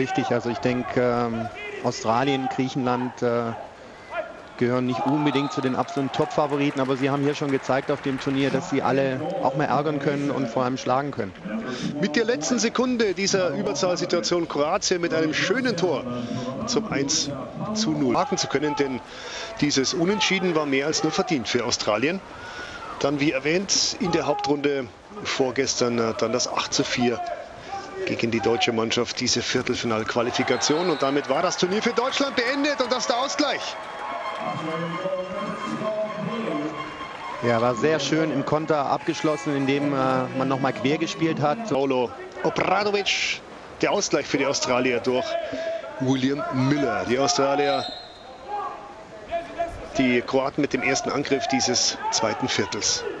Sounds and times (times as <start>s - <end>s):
Speech: 0.0s - 3.6s, 4.2s - 22.2s, 23.0s - 33.8s, 37.4s - 53.2s.